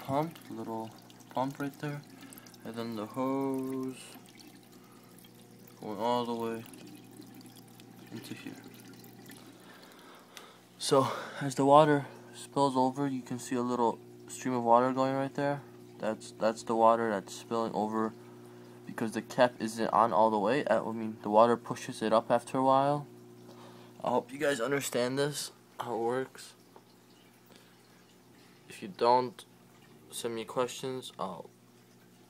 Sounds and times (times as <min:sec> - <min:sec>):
Speech: 0:00.0 - 0:02.0, 0:05.8 - 0:06.7, 0:08.1 - 0:08.6, 0:10.8 - 0:18.2, 0:18.9 - 0:23.1, 0:24.0 - 0:26.6, 0:28.7 - 0:29.5, 0:30.1 - 0:31.5.